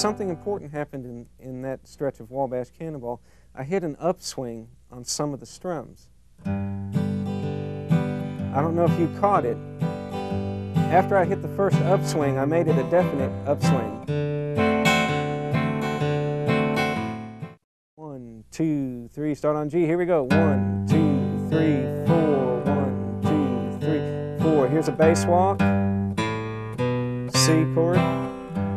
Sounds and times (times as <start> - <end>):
Acoustic guitar: 0.0 - 1.5, 6.4 - 17.6, 20.0 - 28.7
Speech: 0.0 - 6.1, 8.5 - 9.6, 10.9 - 14.0, 18.0 - 25.6, 27.3 - 28.4.